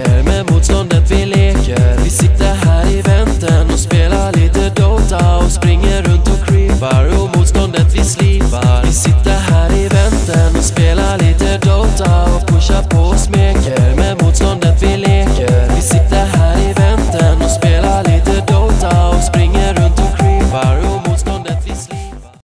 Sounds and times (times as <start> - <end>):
Music: 0.0 - 22.4.